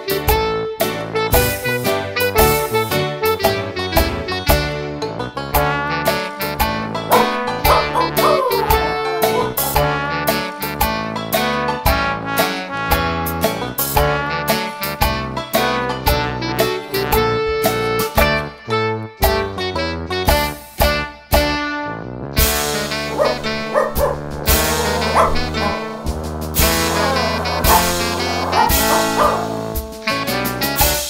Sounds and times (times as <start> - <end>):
Music: 0.0 - 31.1
Yip: 7.1 - 9.8, 23.1 - 25.9, 26.9 - 29.6.